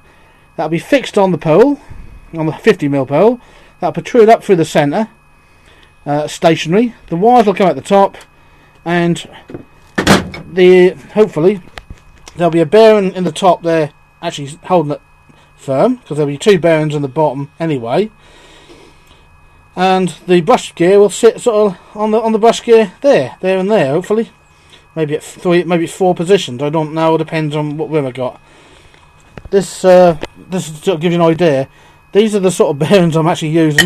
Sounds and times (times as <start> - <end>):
Speech: 0.6 - 5.2, 6.0 - 9.4, 10.6 - 11.7, 12.3 - 15.0, 15.6 - 18.2, 19.8 - 24.4, 25.0 - 28.4, 29.5 - 33.8.